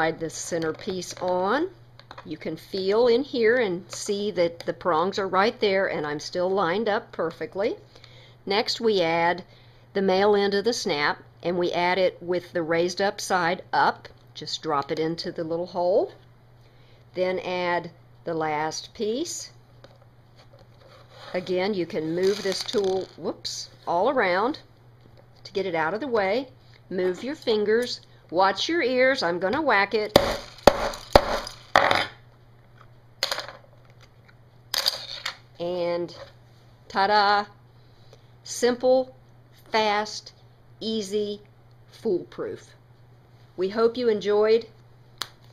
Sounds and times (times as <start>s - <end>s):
Speech: 0.0s - 7.8s, 8.5s - 16.2s, 17.2s - 19.6s, 21.3s - 24.7s, 25.5s - 30.2s, 35.6s - 36.3s, 36.9s - 37.6s, 38.5s - 42.8s, 43.6s - 44.8s.